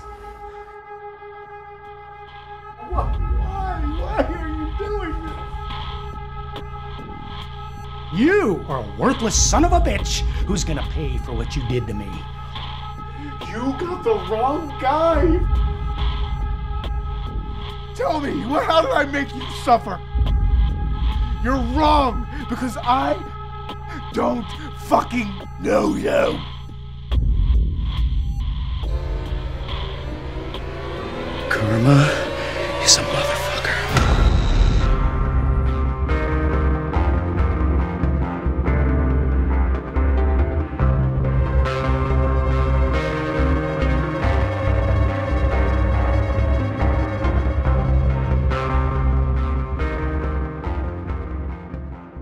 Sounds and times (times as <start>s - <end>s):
Music: 0.0s - 52.2s
Speech: 2.8s - 5.4s, 8.2s - 12.2s, 13.4s - 15.4s, 18.0s - 20.0s, 21.4s - 23.3s, 24.0s - 26.5s, 31.5s - 34.0s.